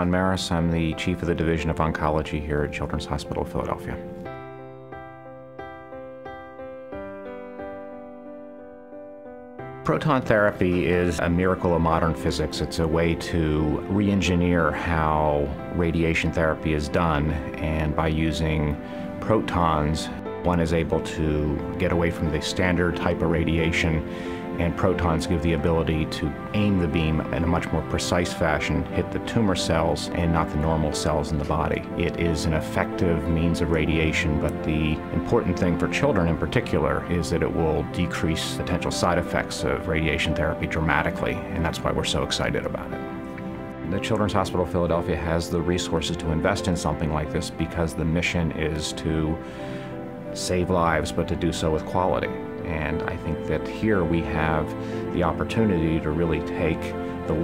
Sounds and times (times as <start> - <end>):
Speech: 0.0 - 4.0, 9.9 - 43.0, 43.8 - 49.4, 50.3 - 57.4
Music: 0.0 - 57.4.